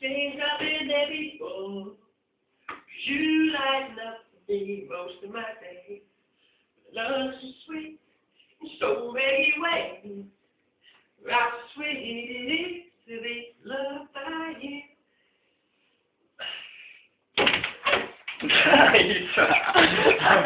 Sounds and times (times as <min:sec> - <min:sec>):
Male singing: 0:00.0 - 0:02.0, 0:08.6 - 0:10.2, 0:11.2 - 0:14.9.